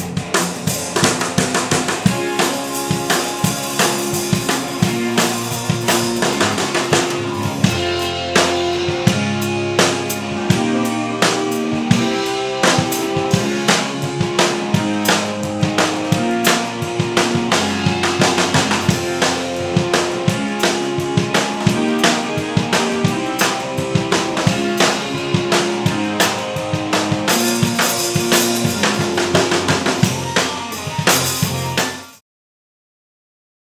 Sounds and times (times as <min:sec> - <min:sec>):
Drum: 0:00.0 - 0:32.2
Drum kit: 0:00.0 - 0:32.2.